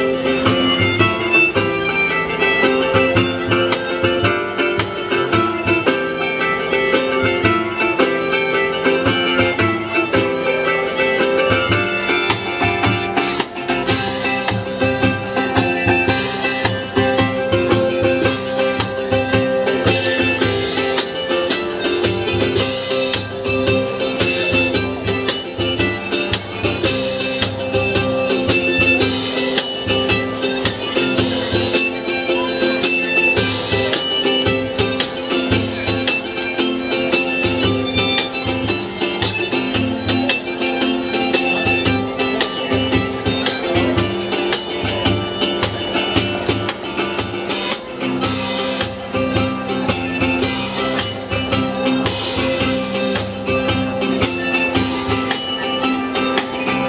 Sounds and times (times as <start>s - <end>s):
Independent music: 0.0s - 56.8s.